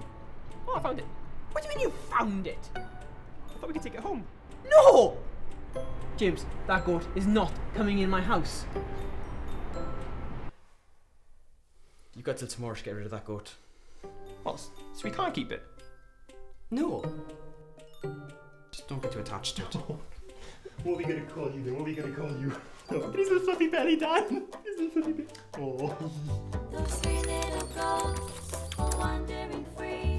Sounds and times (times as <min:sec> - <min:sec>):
Music: 0:00.0 - 0:10.6, 0:14.0 - 0:30.1
Speech: 0:12.2 - 0:13.6, 0:18.8 - 0:20.0, 0:20.8 - 0:26.2.